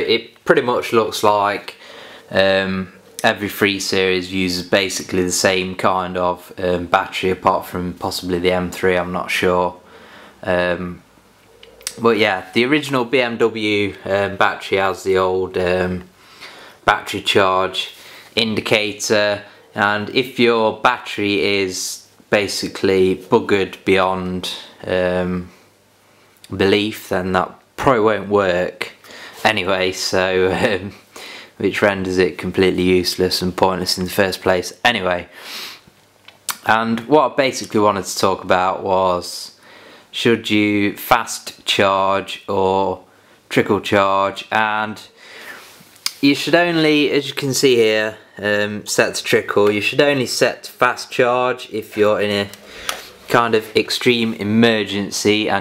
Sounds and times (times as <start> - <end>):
Speech: 0.0 - 11.1, 11.7 - 16.1, 16.8 - 25.6, 26.4 - 35.4, 36.5 - 45.2, 46.1 - 55.6.